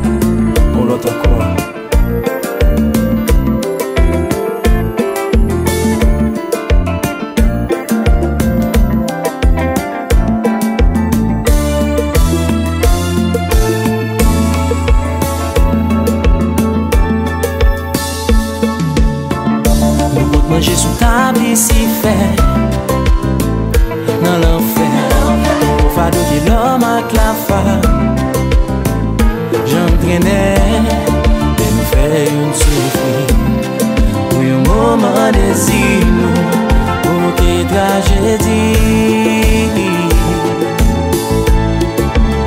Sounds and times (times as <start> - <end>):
Music: 0.0 - 42.4.